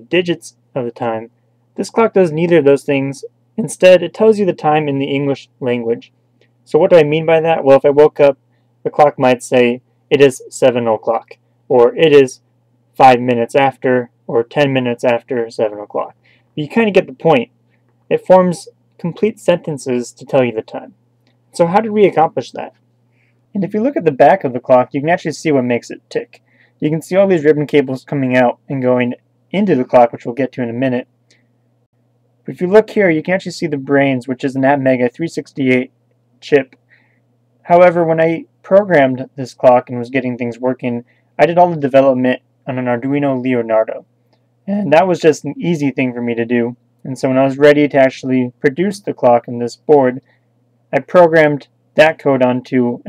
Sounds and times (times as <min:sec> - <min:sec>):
Speech: 0:00.0 - 0:06.1, 0:06.7 - 0:12.4, 0:13.0 - 0:17.5, 0:18.1 - 0:21.0, 0:21.6 - 0:22.8, 0:23.5 - 0:31.1, 0:32.5 - 0:36.8, 0:37.6 - 0:44.1, 0:44.7 - 0:50.3, 0:50.9 - 0:53.0.